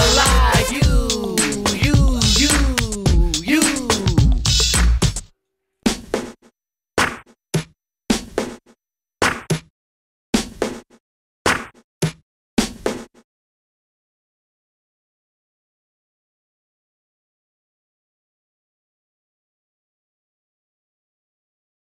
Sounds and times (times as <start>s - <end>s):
Music: 0.0s - 5.3s, 5.9s - 6.4s.